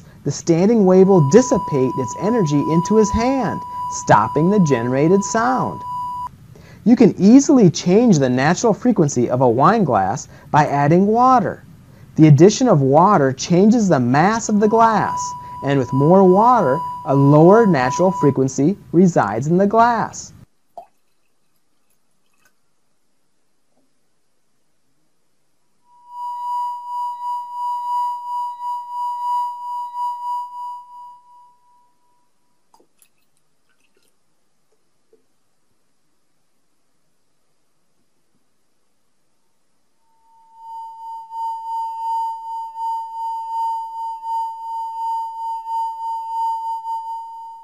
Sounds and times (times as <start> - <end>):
Speech: 0.3 - 5.8, 6.8 - 11.6, 12.2 - 20.4.